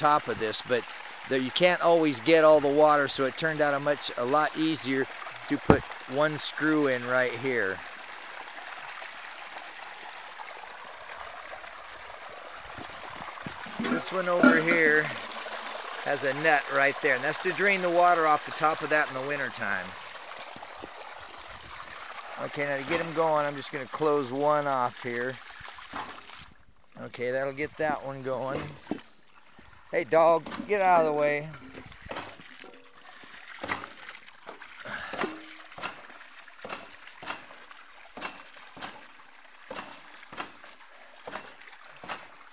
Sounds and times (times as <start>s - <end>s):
Pump (liquid): 0.0s - 42.5s
Water: 0.0s - 42.5s.